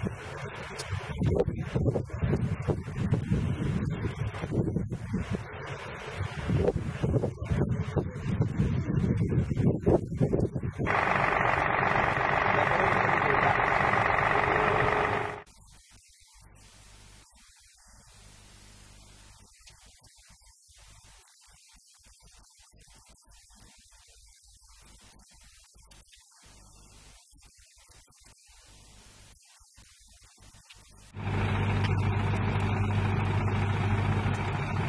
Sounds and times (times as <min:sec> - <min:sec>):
Wind noise (microphone): 0:00.0 - 0:10.9.